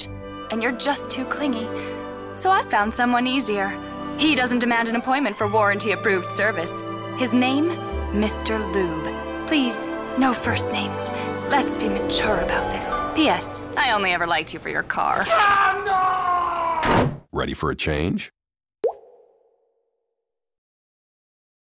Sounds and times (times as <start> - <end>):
Music: 0.0 - 15.2
Speech: 17.3 - 18.4.